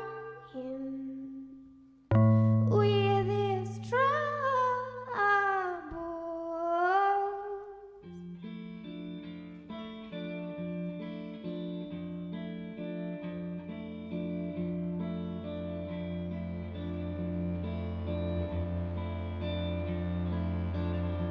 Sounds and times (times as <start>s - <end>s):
Music: 0.0s - 21.3s.